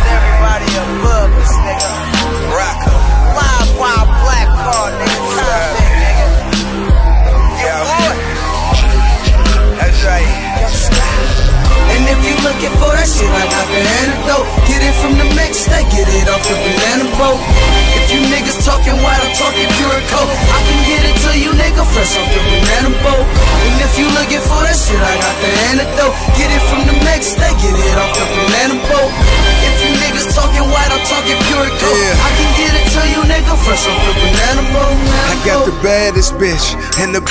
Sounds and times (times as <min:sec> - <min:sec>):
Music: 0:00.0 - 0:37.3.